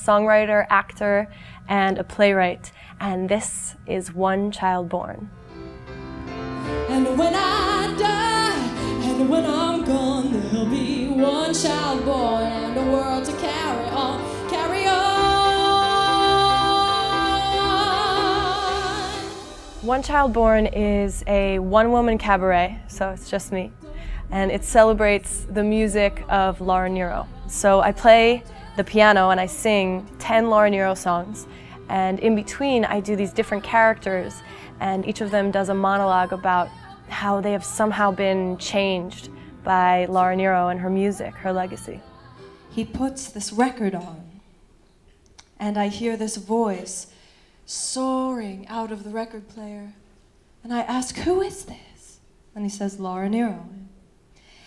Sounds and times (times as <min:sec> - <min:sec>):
Speech: 0:00.0 - 0:05.3, 0:19.8 - 0:42.0, 0:45.6 - 0:47.1, 0:50.6 - 0:53.9
Music: 0:00.0 - 0:50.0.